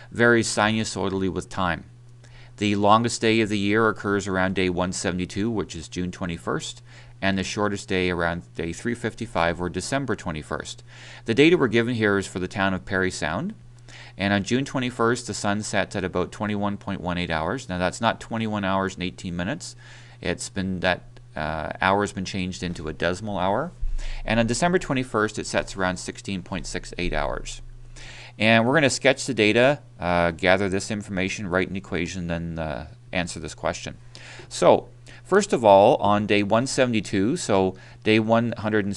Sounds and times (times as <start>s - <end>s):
Speech: 0.1s - 1.9s, 2.6s - 13.6s, 14.2s - 27.6s, 28.4s - 38.9s.